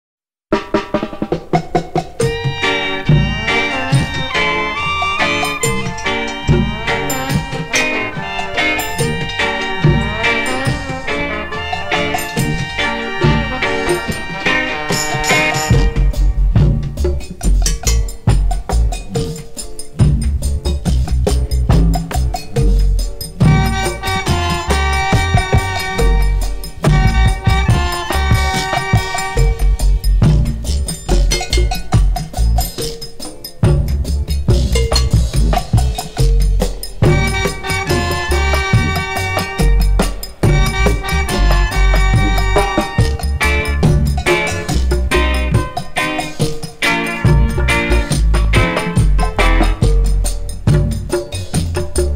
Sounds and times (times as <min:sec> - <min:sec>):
Music: 0:00.5 - 0:52.1.